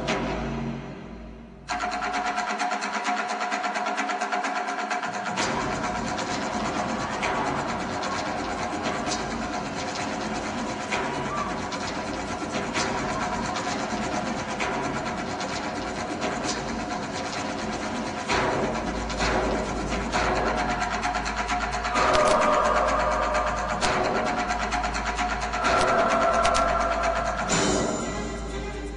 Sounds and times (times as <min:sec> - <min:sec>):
Inside, large room or hall: 0:00.0 - 0:28.9
Music: 0:00.0 - 0:28.9.